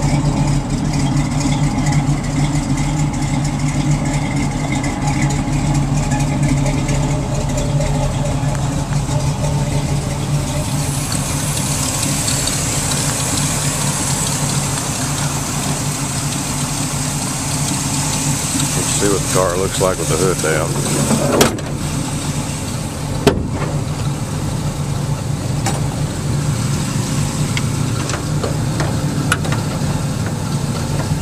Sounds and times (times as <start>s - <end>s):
Traffic noise, roadway noise: 0.0s - 31.2s.